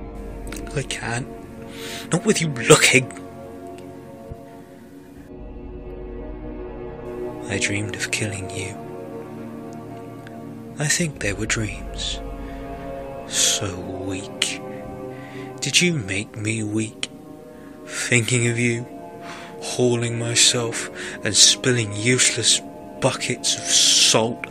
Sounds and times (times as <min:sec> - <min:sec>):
Narration, monologue: 0:00.0 - 0:05.4, 0:07.0 - 0:24.5
Music: 0:00.0 - 0:24.5.